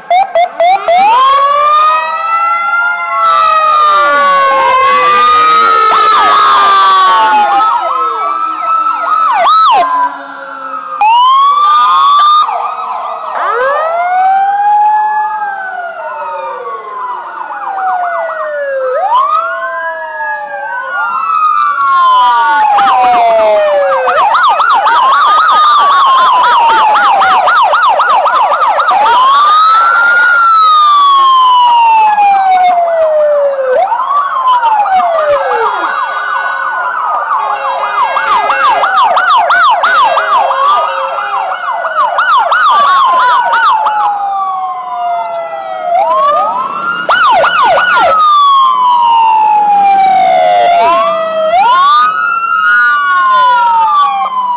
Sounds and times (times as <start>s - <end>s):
Ambulance (siren): 0.0s - 54.5s
Police car (siren): 0.0s - 54.5s.